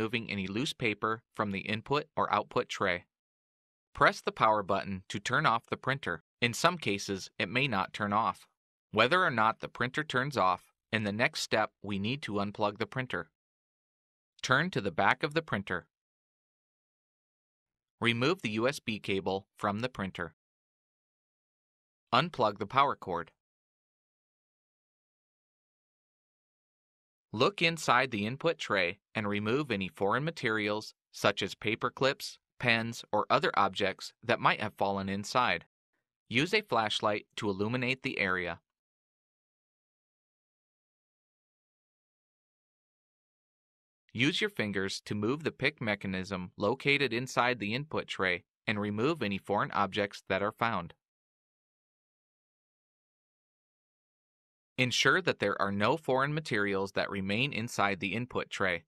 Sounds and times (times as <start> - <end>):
Speech: 0.0 - 3.1, 4.0 - 13.4, 14.4 - 15.9, 18.0 - 20.4, 22.2 - 23.4, 27.4 - 35.7, 36.3 - 38.6, 44.2 - 51.0, 54.8 - 58.8.